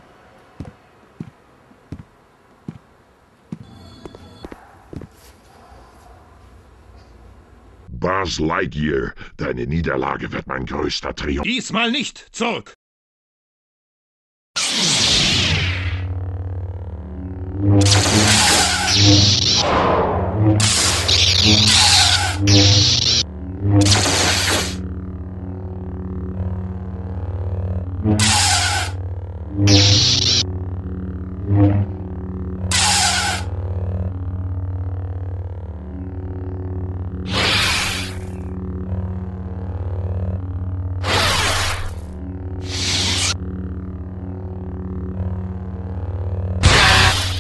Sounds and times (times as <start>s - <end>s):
Speech: 7.9s - 12.8s.